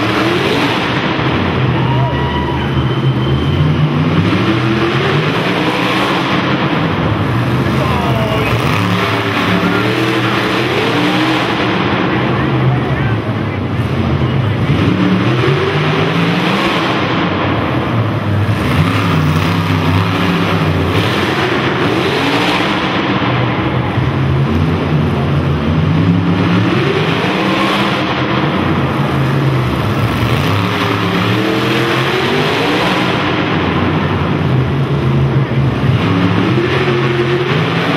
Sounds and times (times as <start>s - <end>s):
Skidding: 0.0s - 37.9s.